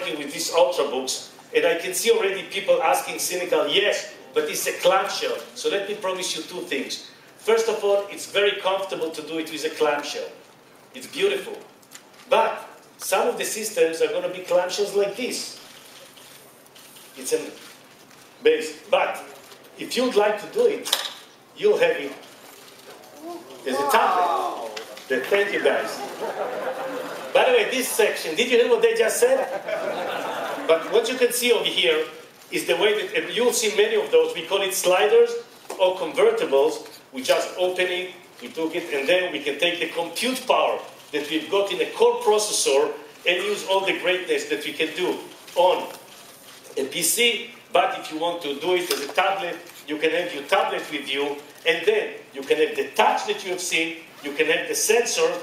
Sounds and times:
Speech: 0:00.0 - 0:10.4, 0:11.0 - 0:11.7, 0:12.3 - 0:15.6, 0:17.2 - 0:17.6, 0:18.4 - 0:21.0, 0:21.6 - 0:22.2, 0:23.2 - 0:26.2, 0:27.3 - 0:29.6, 0:30.7 - 0:46.0, 0:46.8 - 0:55.4
Inside, large room or hall: 0:00.0 - 0:55.4.

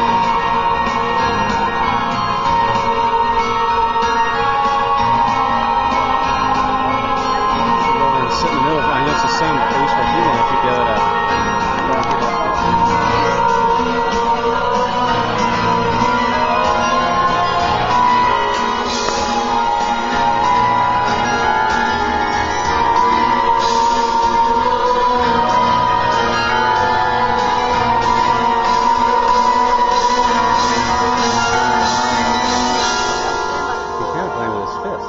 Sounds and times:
Glockenspiel: 0:00.0 - 0:35.0
Marimba, xylophone: 0:00.0 - 0:35.0.

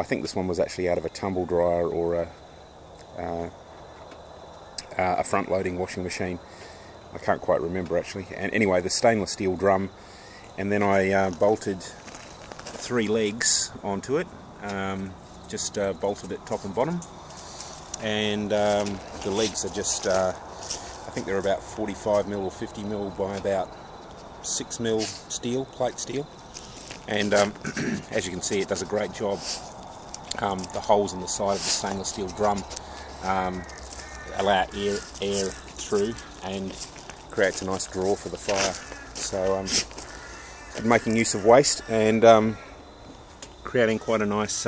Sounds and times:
Speech: 0:00.0 - 0:02.4, 0:03.2 - 0:03.5, 0:04.8 - 0:06.4, 0:07.1 - 0:10.0, 0:10.6 - 0:12.0, 0:12.8 - 0:17.0, 0:18.0 - 0:20.4, 0:21.2 - 0:23.7, 0:24.4 - 0:26.3, 0:27.1 - 0:29.6, 0:30.3 - 0:33.7, 0:34.3 - 0:39.8, 0:40.8 - 0:42.6, 0:43.7 - 0:44.6.

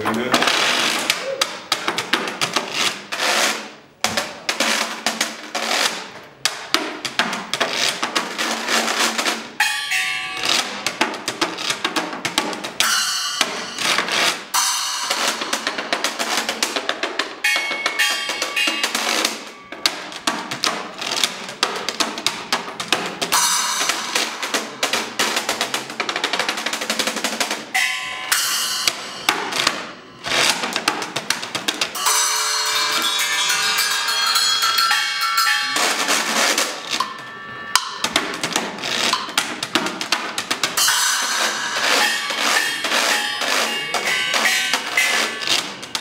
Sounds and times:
Drum: 0:00.0 - 0:46.0
Wood block: 0:00.0 - 0:46.0.

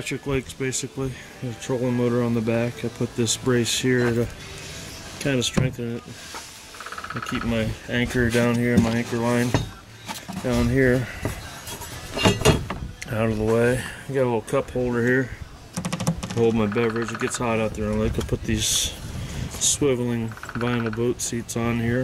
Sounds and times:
Speech: 0:00.0 - 0:04.3, 0:05.2 - 0:06.0, 0:07.2 - 0:09.8, 0:10.4 - 0:11.2, 0:13.0 - 0:15.4, 0:16.3 - 0:19.0, 0:19.6 - 0:22.0.

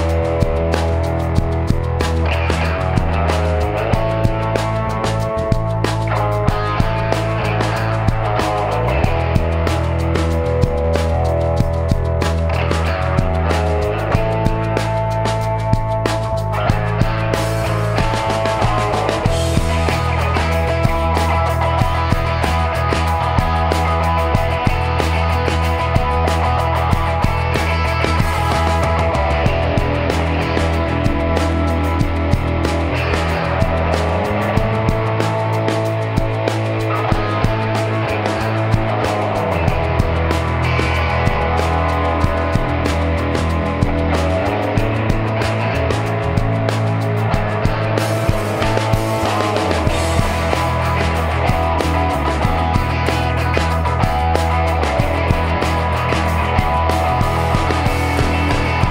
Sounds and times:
Country: 0:00.0 - 0:58.9.

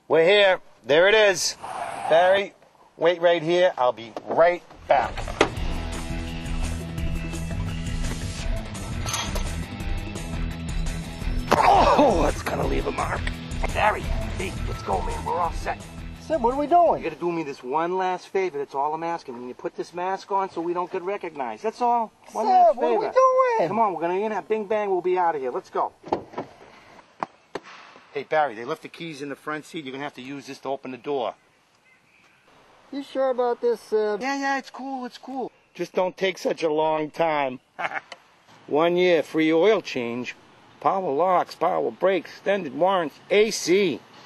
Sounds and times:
Music: 0:04.8 - 0:17.2.

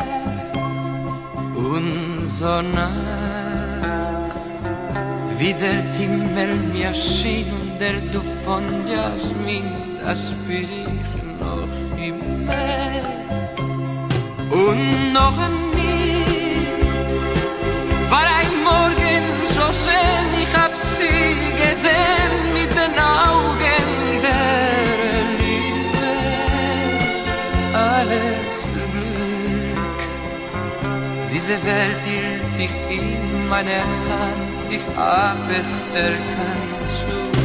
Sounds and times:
Music: 0:00.0 - 0:37.4.

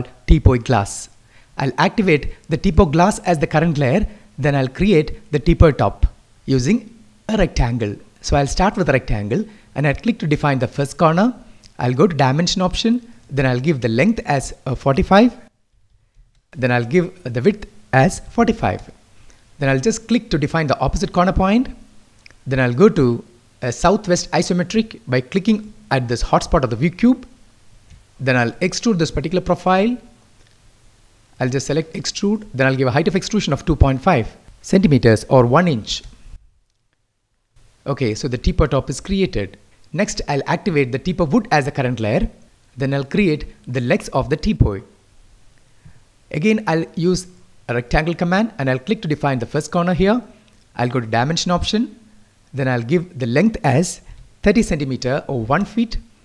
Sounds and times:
Speech: 0:00.0 - 0:15.5, 0:16.6 - 0:19.0, 0:19.6 - 0:21.8, 0:22.4 - 0:27.3, 0:28.2 - 0:30.1, 0:31.4 - 0:36.1, 0:37.8 - 0:45.0, 0:46.3 - 0:52.0, 0:52.6 - 0:56.1.

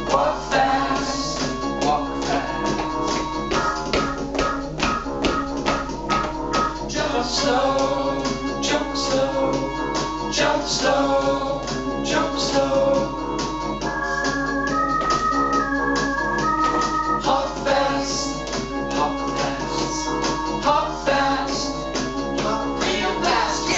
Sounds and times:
Music: 0:00.0 - 0:23.7.

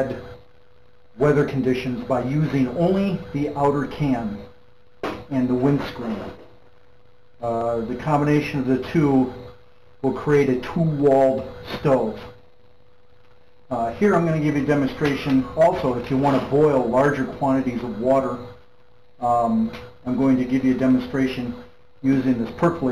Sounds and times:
Speech: 0:00.0 - 0:00.3, 0:01.2 - 0:04.5, 0:05.2 - 0:06.5, 0:07.4 - 0:09.4, 0:10.0 - 0:12.4, 0:13.7 - 0:18.6, 0:19.2 - 0:22.9.

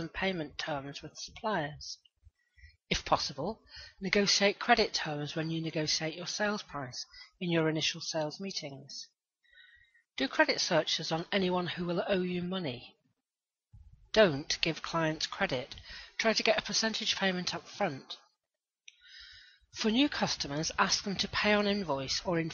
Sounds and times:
Narration, monologue: 0:00.0 - 0:22.5.

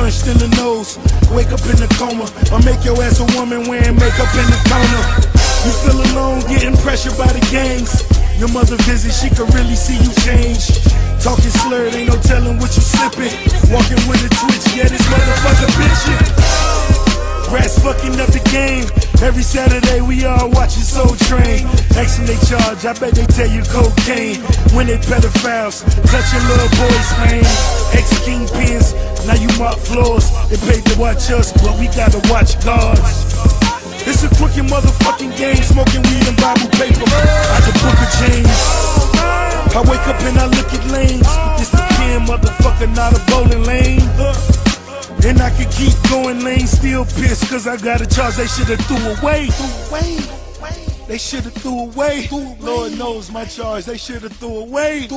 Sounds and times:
Music: 0:00.0 - 0:55.1
Rapping: 0:00.0 - 0:55.1.

